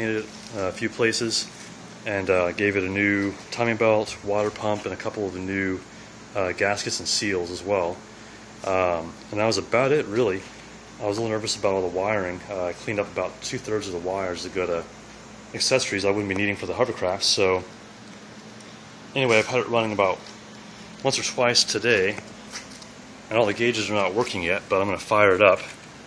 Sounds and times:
Speech: 0.0 - 8.0, 8.6 - 14.9, 15.5 - 17.7, 19.1 - 20.3, 21.0 - 22.2, 23.3 - 25.8.

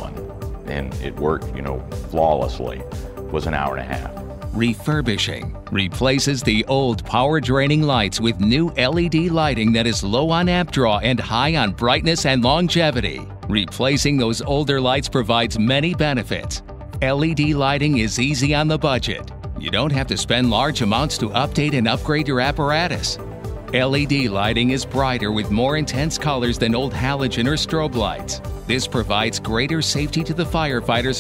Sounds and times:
Music: 0.0 - 31.2
Speech: 0.0 - 31.2.

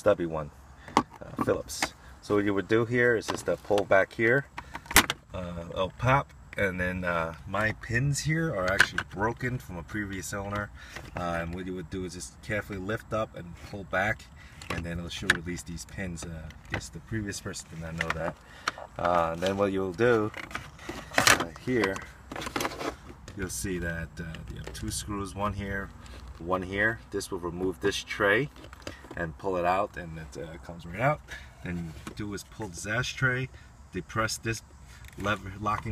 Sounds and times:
Speech: 0.0 - 0.5, 1.2 - 4.5, 5.3 - 18.4, 19.0 - 20.4, 21.3 - 22.1, 23.3 - 28.5, 29.2 - 34.6, 35.2 - 35.9.

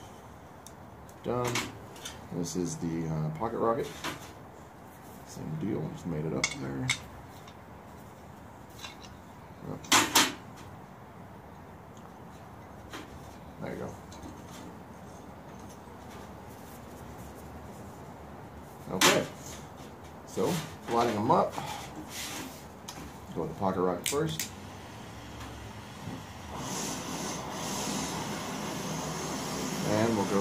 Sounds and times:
Speech: 1.2 - 1.7, 2.3 - 4.0, 5.3 - 7.0, 13.6 - 14.0, 18.9 - 19.4, 20.3 - 21.6, 23.3 - 24.4, 29.8 - 30.4.

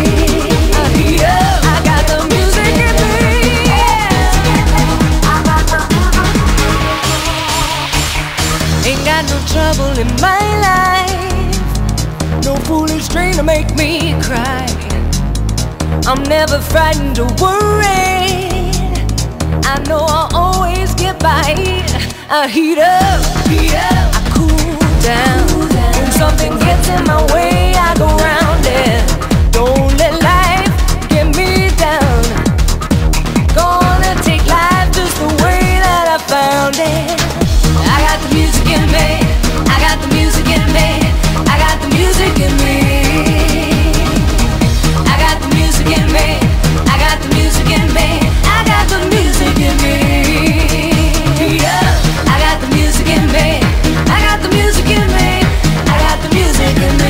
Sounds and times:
Exciting music: 0.0 - 57.0.

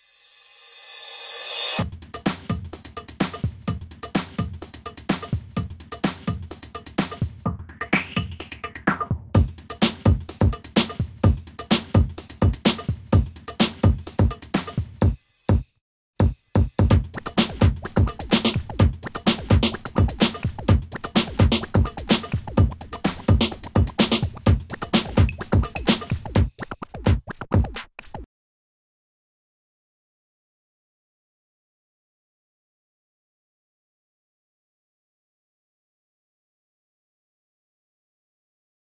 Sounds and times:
Drum machine: 1.8 - 28.3.

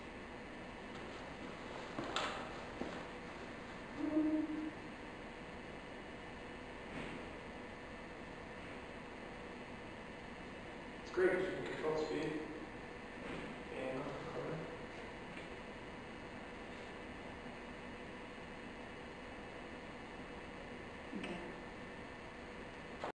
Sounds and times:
Speech: 11.1 - 12.6, 13.7 - 14.7, 21.1 - 21.6.

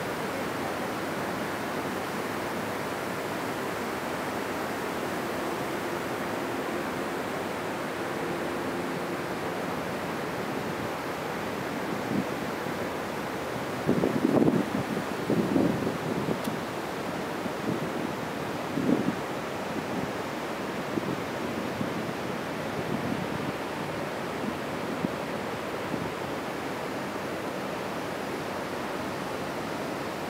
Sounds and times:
Waves, surf: 0.0 - 30.3.

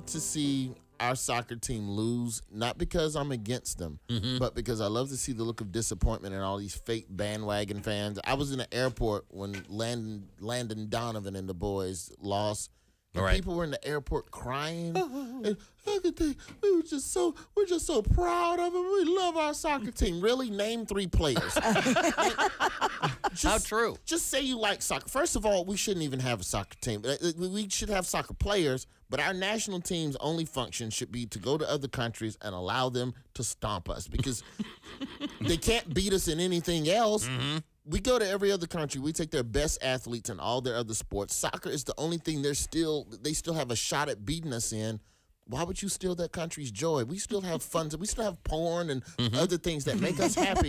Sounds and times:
Speech: 0.0 - 21.7, 23.3 - 34.4, 35.4 - 50.6.

